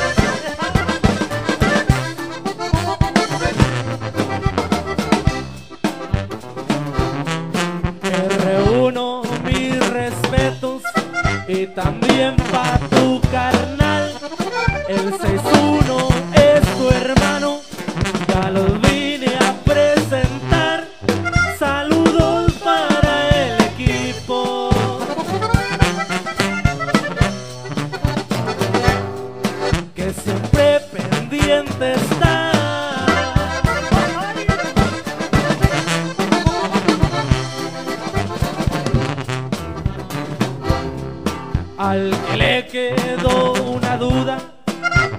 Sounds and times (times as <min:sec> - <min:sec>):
Music of Latin America: 0:00.0 - 0:45.1.